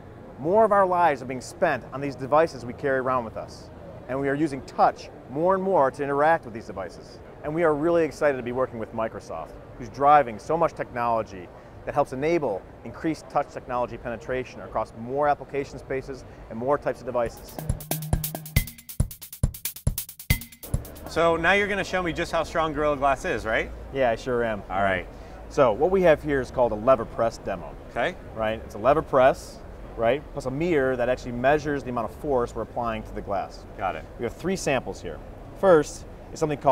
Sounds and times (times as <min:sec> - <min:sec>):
Speech: 0:00.4 - 0:17.6, 0:21.1 - 0:36.7
Music: 0:17.2 - 0:21.4.